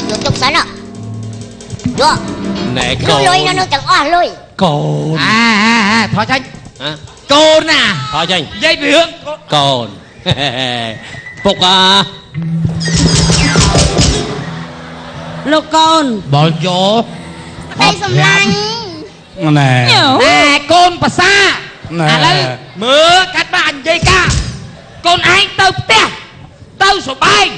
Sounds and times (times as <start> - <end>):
Music: 0.0 - 4.2, 12.3 - 15.5
Inside, large room or hall: 0.0 - 27.5.